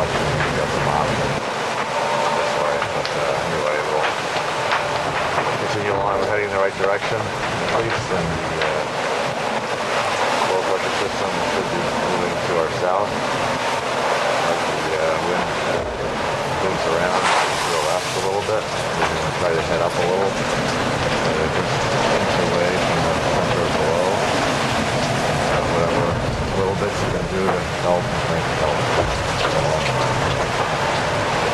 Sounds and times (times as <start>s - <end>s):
Speech: 0.0s - 1.4s, 2.2s - 4.2s, 5.6s - 9.0s, 10.4s - 13.1s, 14.4s - 15.8s, 16.6s - 20.4s, 21.2s - 24.2s, 25.5s - 30.5s
Ocean: 0.0s - 31.5s
Sailboat, sailing ship: 0.0s - 31.5s.